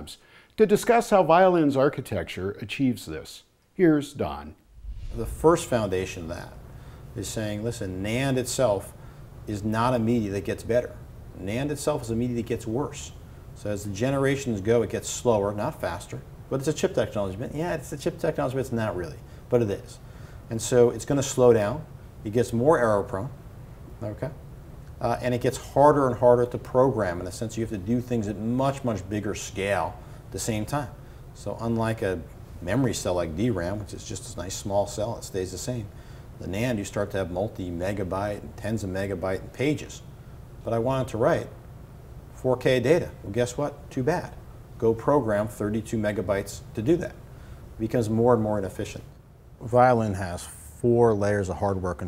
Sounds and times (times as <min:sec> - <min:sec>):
Speech: 0:00.0 - 0:04.6, 0:05.2 - 0:06.6, 0:07.2 - 0:23.4, 0:24.0 - 0:24.4, 0:25.0 - 0:41.6, 0:42.4 - 0:47.2, 0:47.8 - 0:52.0.